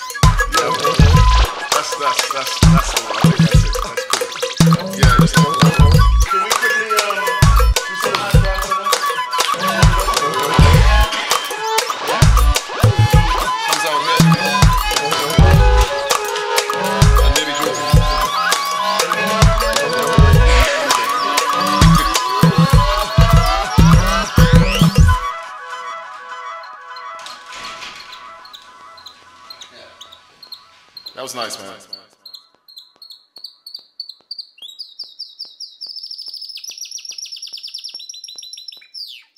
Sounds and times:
Music: 0.0 - 29.9
Speech: 31.2 - 32.1.

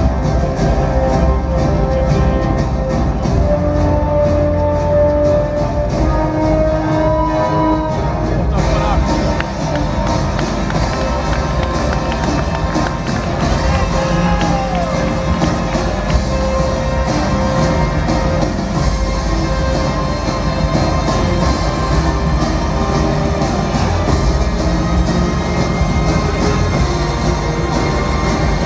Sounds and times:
Music: 0.0 - 28.6
Speech: 8.5 - 9.4.

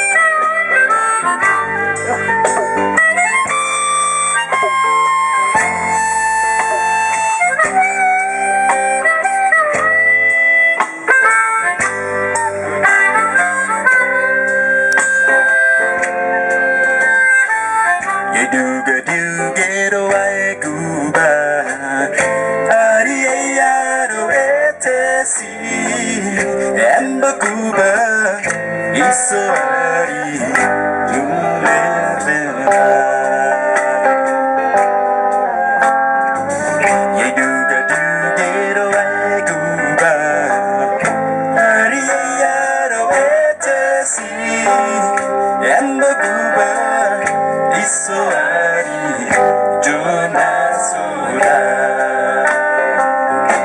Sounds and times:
Music: 0.0 - 53.6.

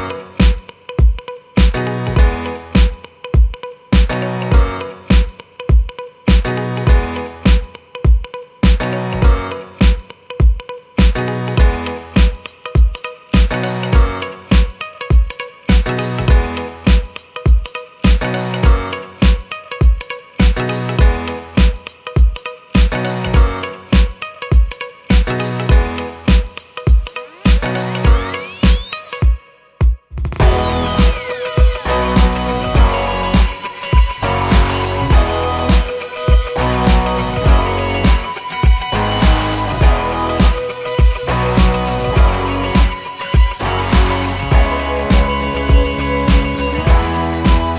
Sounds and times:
Exciting music: 30.4 - 47.7.

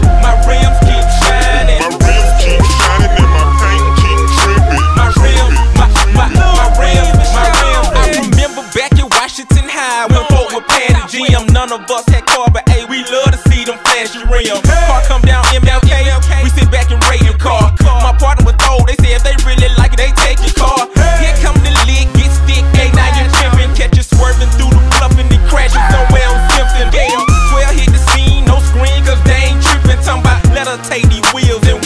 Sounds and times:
Music: 0.0 - 31.8.

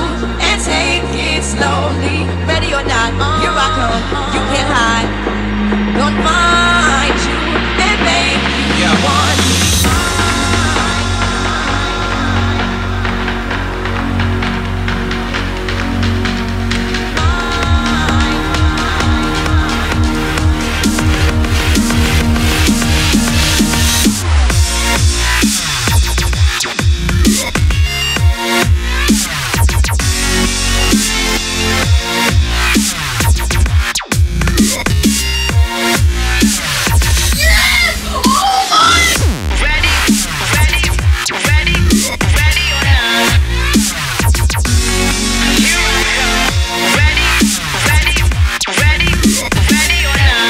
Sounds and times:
Dubstep: 0.0 - 50.4.

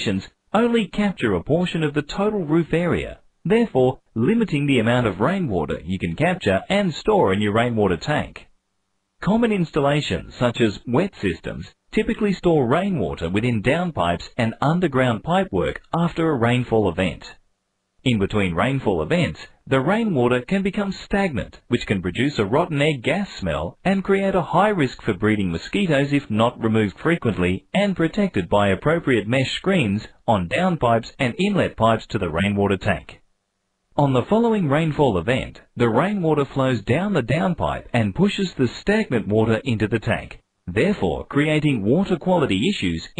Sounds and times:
Speech: 0.0 - 8.5, 9.2 - 17.4, 18.0 - 33.2, 34.0 - 43.1.

